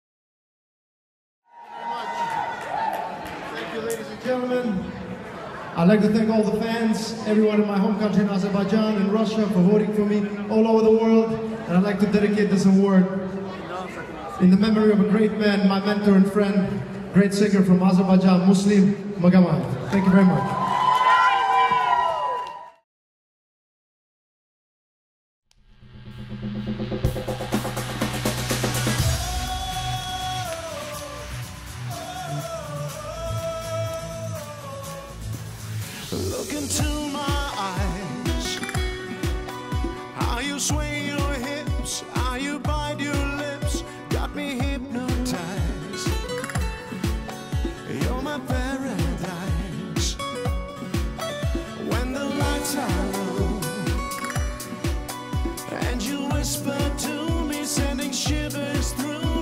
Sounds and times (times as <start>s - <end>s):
Music: 5.8s - 13.5s, 25.6s - 59.4s.